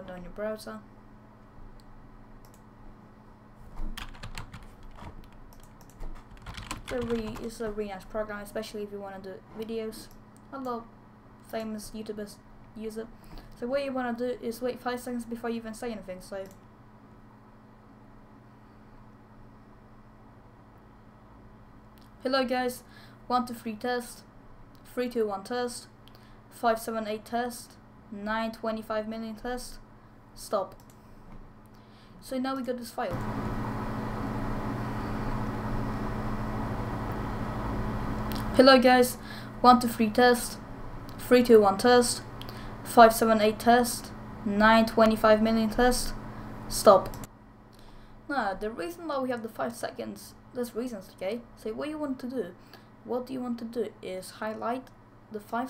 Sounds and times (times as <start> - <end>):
Speech: 0.0 - 0.9, 6.9 - 10.9, 11.5 - 16.5, 22.2 - 25.9, 26.6 - 29.8, 30.4 - 30.8, 32.2 - 33.2, 38.5 - 40.6, 41.2 - 42.3, 42.9 - 47.3, 48.3 - 55.6.